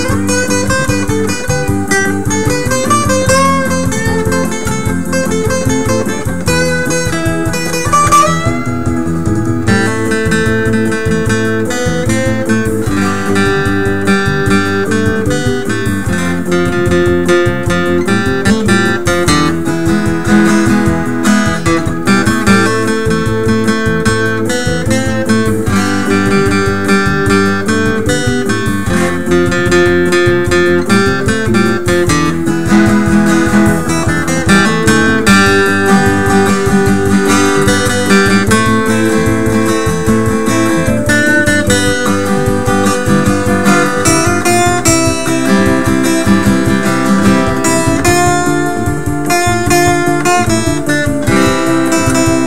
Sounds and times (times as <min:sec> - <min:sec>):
Music: 0:00.0 - 0:52.4.